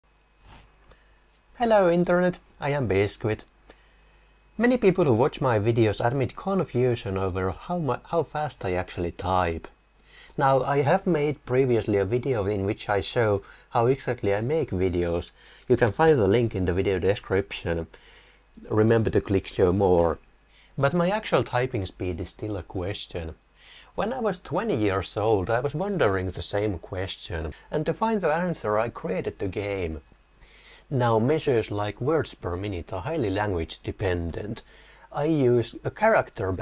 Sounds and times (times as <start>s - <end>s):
Speech: 1.6s - 3.5s, 4.6s - 9.8s, 10.4s - 17.9s, 18.6s - 20.2s, 20.8s - 30.0s, 30.9s - 36.6s.